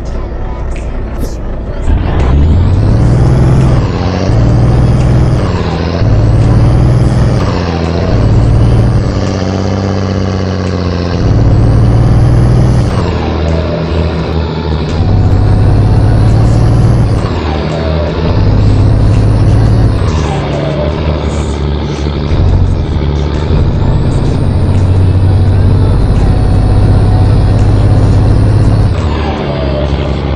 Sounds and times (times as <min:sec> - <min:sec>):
Vehicle: 0:00.0 - 0:30.3.